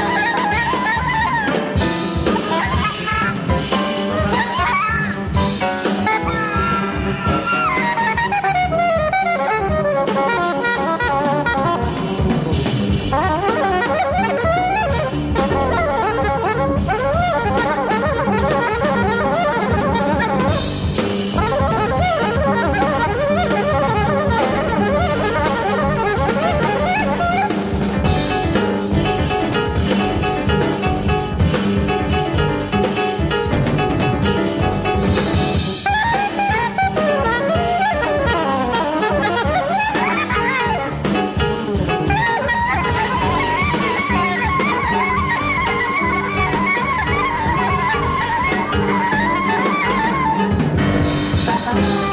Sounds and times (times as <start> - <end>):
Clarinet: 0.0 - 52.1.